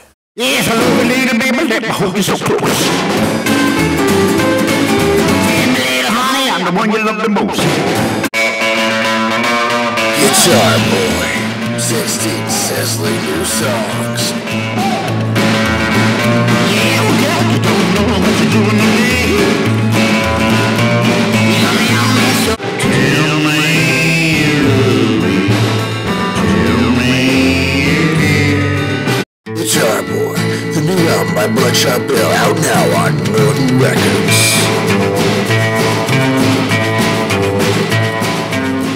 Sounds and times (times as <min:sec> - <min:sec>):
Guitar: 0:00.0 - 0:38.9
Speech: 0:00.4 - 0:02.9, 0:05.5 - 0:07.8, 0:10.2 - 0:15.0, 0:16.6 - 0:19.5, 0:29.5 - 0:34.8.